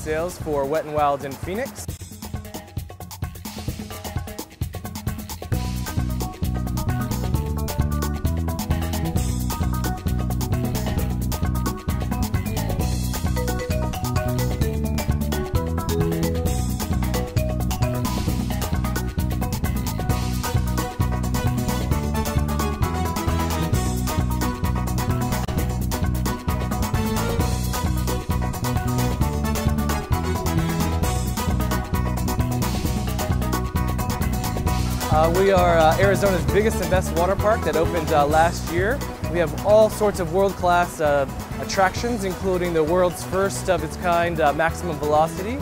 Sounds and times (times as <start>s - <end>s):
Speech: 0.0s - 1.9s, 35.1s - 45.6s
Music: 0.0s - 45.6s.